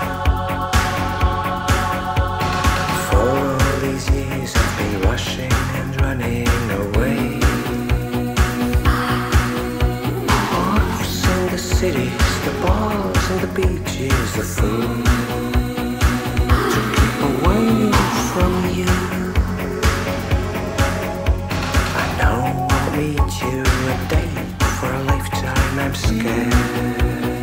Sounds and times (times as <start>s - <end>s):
Music of Asia: 0.0s - 27.4s.